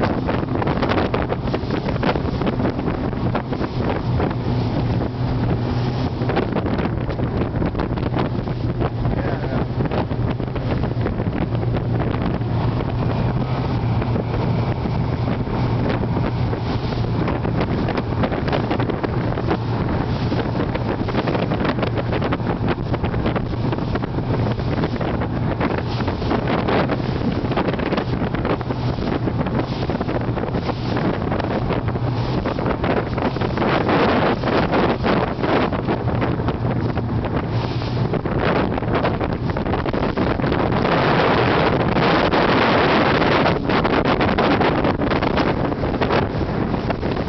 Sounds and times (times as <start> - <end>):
Motorboat, speedboat: 0.0 - 47.2
Sailboat, sailing ship: 0.0 - 47.2.